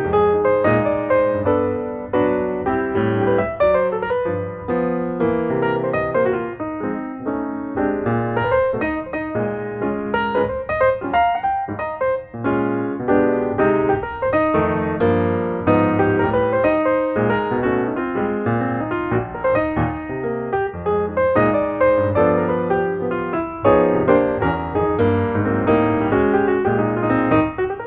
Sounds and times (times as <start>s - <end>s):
Music: 0.0s - 27.8s.